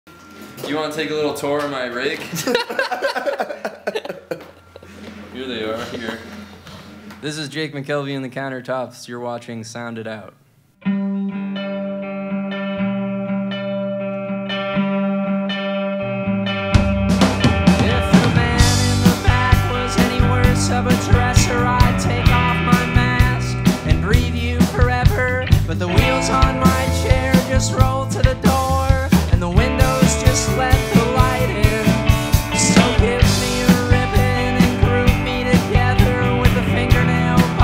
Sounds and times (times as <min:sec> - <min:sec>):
Speech: 0:00.6 - 0:02.3, 0:05.4 - 0:06.3, 0:07.2 - 0:10.4
Laughter: 0:02.2 - 0:06.6.